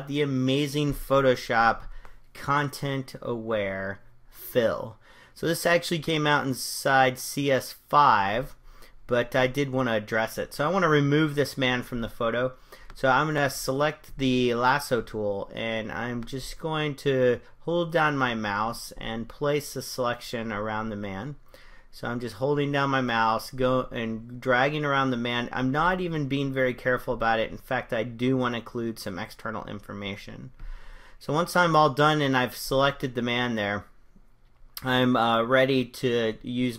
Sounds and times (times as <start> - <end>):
Speech: 0.0 - 21.4, 22.0 - 30.6, 31.2 - 34.0, 34.8 - 36.7.